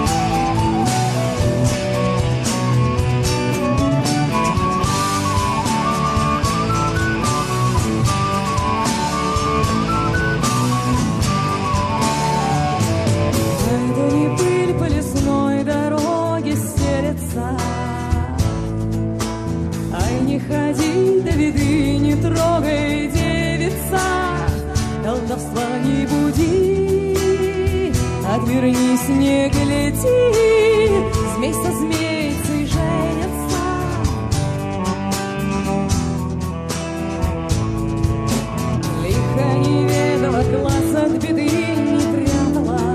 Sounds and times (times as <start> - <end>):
Music: 0.0 - 42.9.